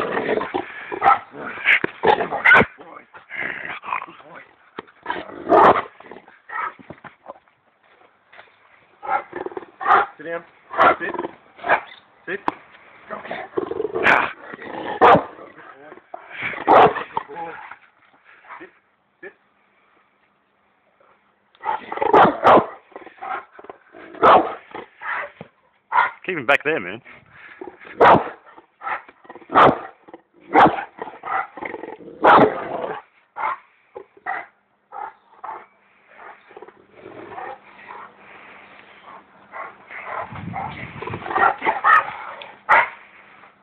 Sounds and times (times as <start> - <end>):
Bow-wow: 1.0 - 2.8, 5.5 - 5.9, 15.0 - 15.4, 16.7 - 17.1, 21.7 - 23.4, 24.2 - 25.3, 28.0 - 31.5, 32.2 - 33.6, 41.4 - 43.0
Speech: 26.2 - 27.1.